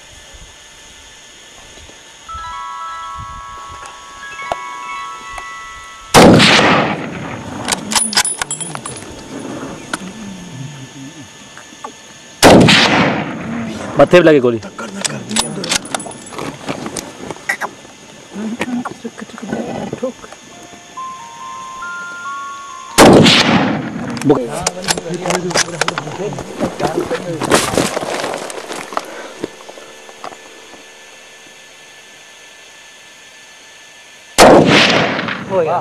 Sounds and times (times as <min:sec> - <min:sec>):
Outside, rural or natural: 0:00.0 - 0:35.8
Music: 0:02.3 - 0:06.2, 0:20.5 - 0:23.0.